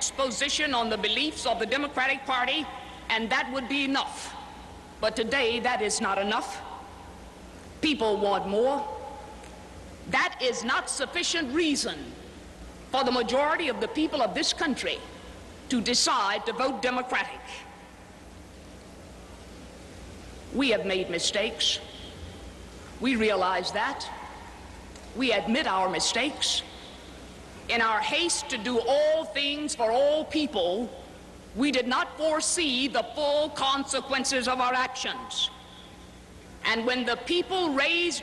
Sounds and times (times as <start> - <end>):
Female speech, woman speaking: 0.0 - 4.4, 5.0 - 6.7, 7.8 - 9.0, 10.1 - 12.2, 13.0 - 15.0, 15.7 - 17.7, 20.6 - 21.9, 23.0 - 24.3, 25.2 - 26.7, 27.7 - 30.9, 31.6 - 35.6, 36.6 - 38.2
Narration, monologue: 0.0 - 38.2.